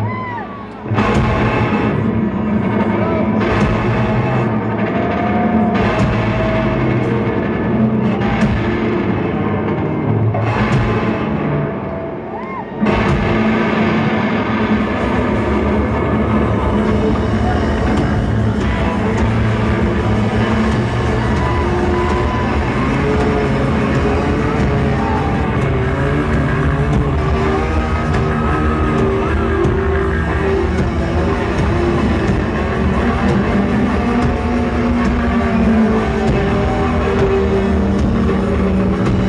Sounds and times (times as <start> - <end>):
Music: 0.0 - 39.2.